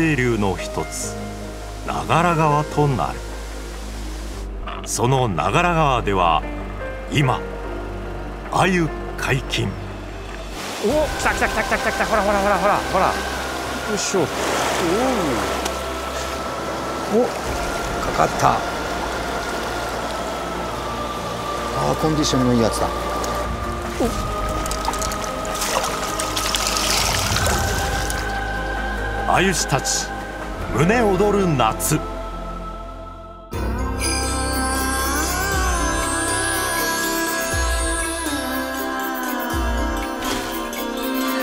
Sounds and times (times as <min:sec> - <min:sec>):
Stream: 0:00.0 - 0:32.7, 0:33.5 - 0:41.4
Music: 0:00.0 - 0:41.4
Speech: 0:04.6 - 0:06.4, 0:29.3 - 0:30.1, 0:30.8 - 0:32.0.